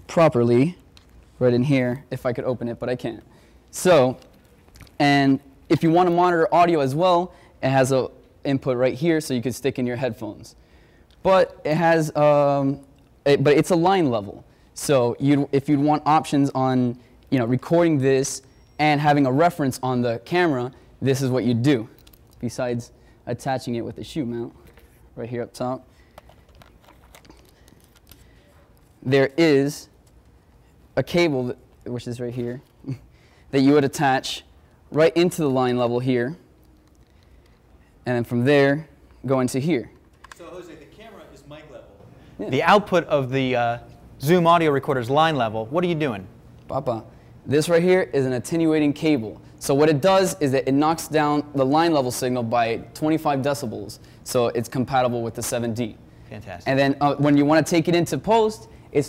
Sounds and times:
Speech: 0.1s - 0.8s, 1.4s - 4.3s, 5.0s - 10.6s, 11.2s - 24.6s, 25.2s - 25.9s, 29.0s - 29.9s, 31.0s - 36.4s, 38.0s - 59.0s.

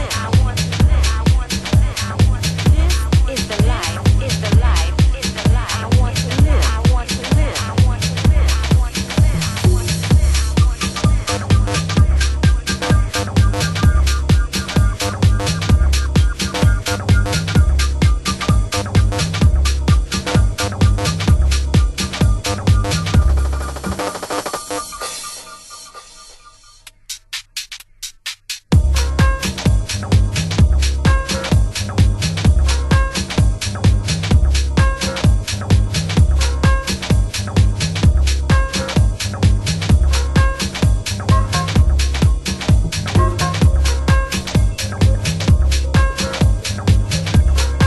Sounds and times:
Drum and bass: 0.0s - 47.8s.

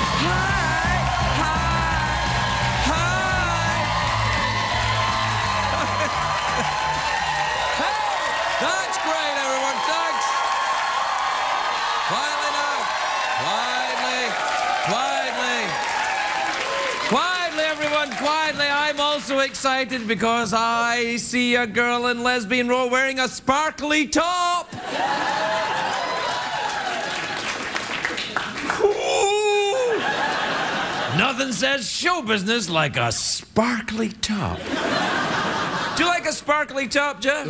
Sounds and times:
Music: 0.0s - 7.4s
Speech: 8.6s - 10.3s, 12.1s - 15.8s, 17.1s - 24.7s, 31.1s - 34.6s, 36.0s - 37.5s.

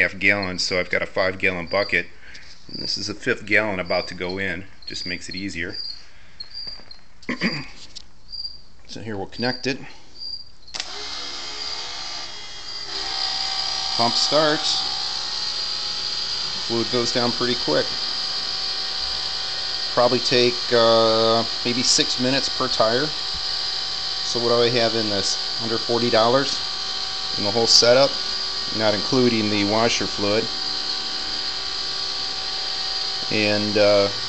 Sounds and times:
Speech: 0.0s - 2.1s, 2.7s - 5.8s, 8.9s - 10.0s, 14.0s - 14.8s, 16.7s - 17.9s, 20.0s - 23.2s, 24.3s - 26.6s, 27.4s - 30.5s, 33.2s - 34.2s.

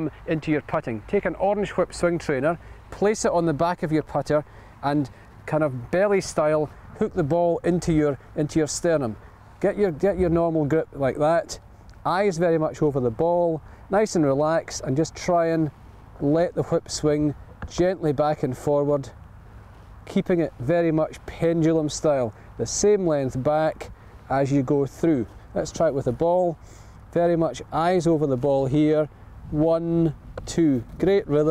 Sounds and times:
Speech: 0.0s - 19.2s, 20.0s - 31.5s.

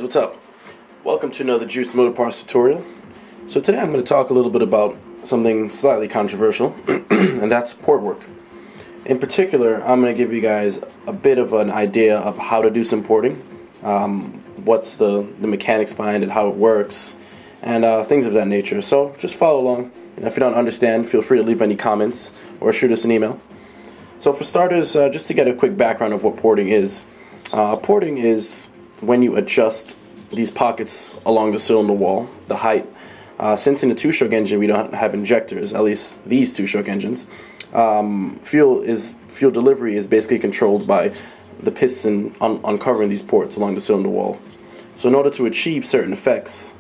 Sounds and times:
Speech: 0.0s - 0.4s, 1.0s - 2.9s, 3.5s - 8.3s, 9.0s - 23.4s, 24.2s - 44.4s, 45.0s - 46.8s.

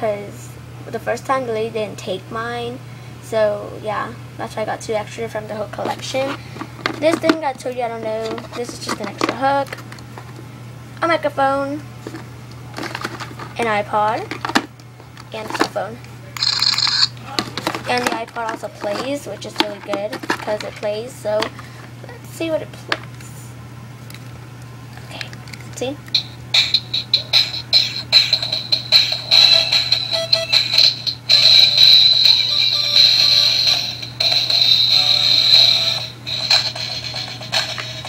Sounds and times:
Speech: 0.0s - 6.4s, 7.0s - 9.7s, 11.0s - 11.8s, 13.6s - 14.3s, 15.3s - 16.4s, 17.2s - 21.5s, 22.1s - 23.5s, 25.1s - 26.0s
Inside, small room: 0.0s - 38.0s
Music: 26.1s - 38.0s.

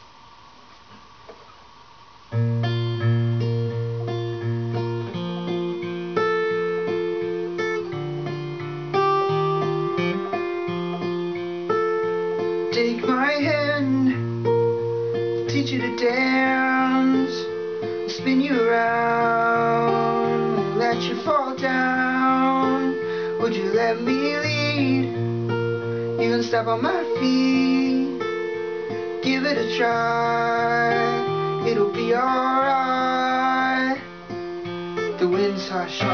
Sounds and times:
Music: 2.3s - 36.1s.

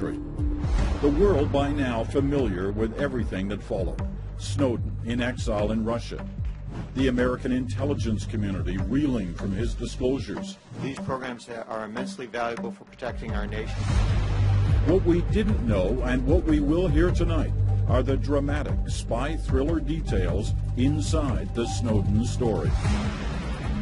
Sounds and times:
Speech: 1.0s - 6.2s, 7.0s - 13.8s, 14.9s - 22.7s.

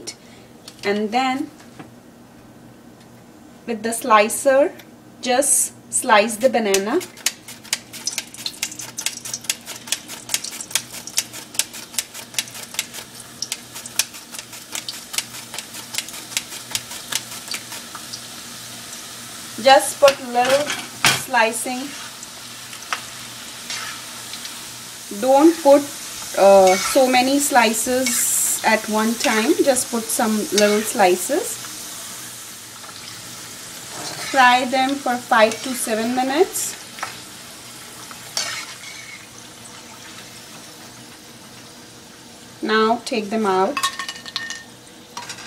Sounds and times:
Frying (food): 5.2s - 45.4s.

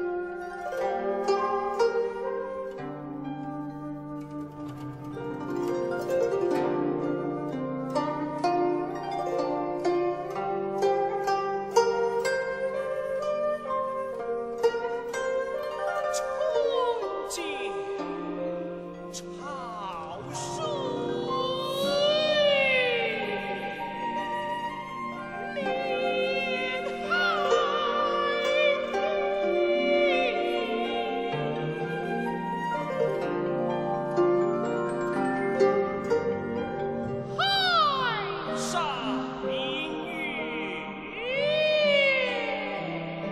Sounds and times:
Music: 0.0s - 43.3s.

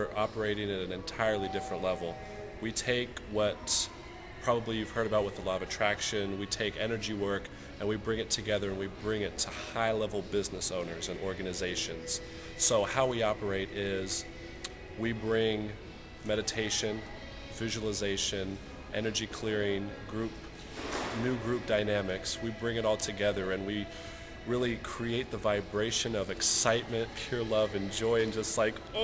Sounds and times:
Speech: 0.0s - 14.2s, 15.0s - 20.4s, 21.2s - 23.9s, 24.5s - 29.0s
Music: 0.0s - 29.0s.

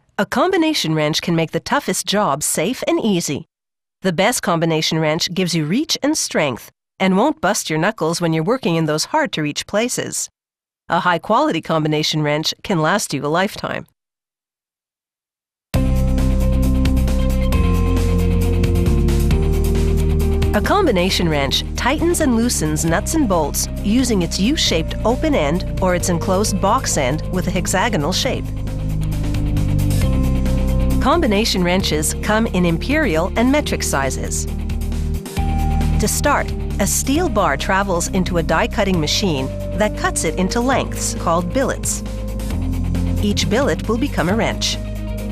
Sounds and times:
Speech: 0.2s - 10.3s, 10.9s - 13.9s, 20.6s - 28.4s, 31.0s - 34.5s, 36.0s - 42.0s, 43.2s - 44.8s.

